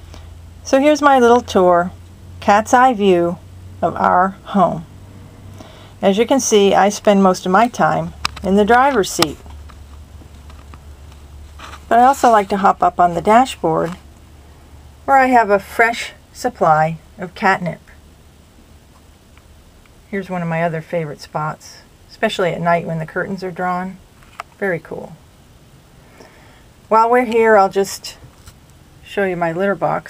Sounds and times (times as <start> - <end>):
Speech: 0.7 - 4.9, 6.0 - 9.4, 11.9 - 14.0, 15.1 - 18.0, 20.1 - 24.0, 24.6 - 25.2, 26.9 - 28.2, 29.0 - 30.1.